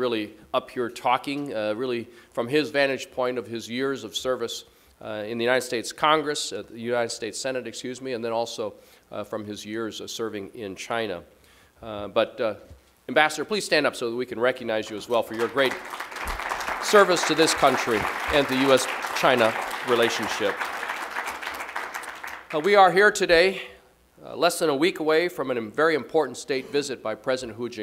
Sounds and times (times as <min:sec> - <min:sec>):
Male speech, man speaking: 0:00.0 - 0:11.2, 0:11.8 - 0:15.8, 0:16.8 - 0:20.6, 0:22.5 - 0:27.8
Narration, monologue: 0:00.0 - 0:21.0, 0:22.0 - 0:27.8.